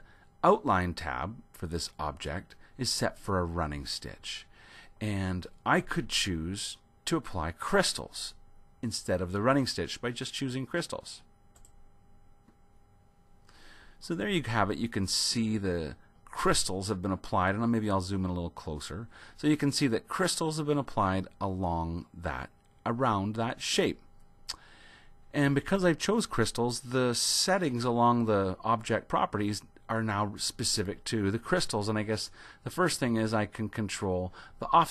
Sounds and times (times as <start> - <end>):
Speech: 0.0 - 11.3, 14.0 - 24.0, 25.3 - 34.9.